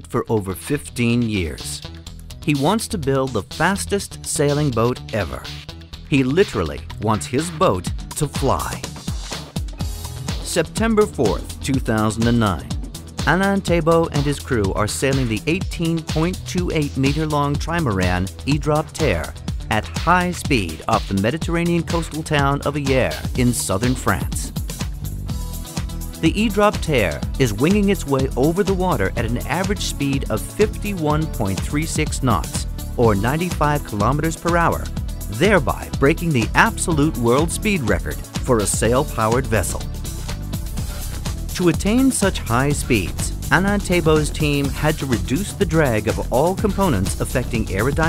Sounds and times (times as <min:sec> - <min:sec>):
Speech: 0:00.0 - 0:01.8, 0:02.4 - 0:09.0, 0:10.4 - 0:24.5, 0:26.2 - 0:39.8, 0:41.6 - 0:48.0
Music: 0:00.0 - 0:48.0.